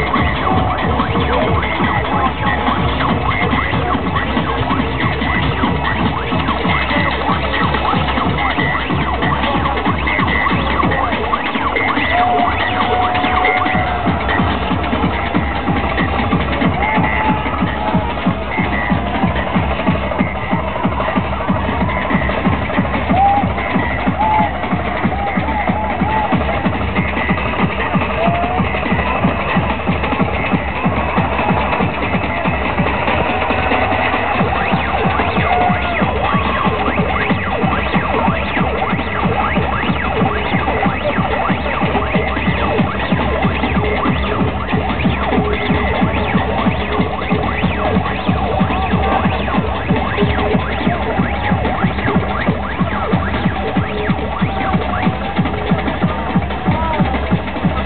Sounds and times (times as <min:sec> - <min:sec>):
Electronic music: 0:00.0 - 0:57.8.